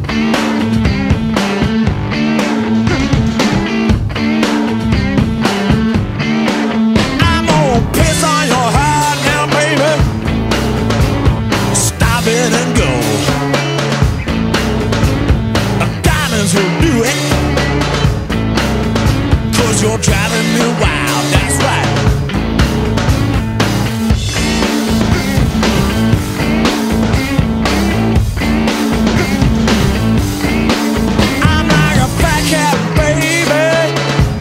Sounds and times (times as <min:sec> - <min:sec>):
Blues: 0:00.0 - 0:34.4.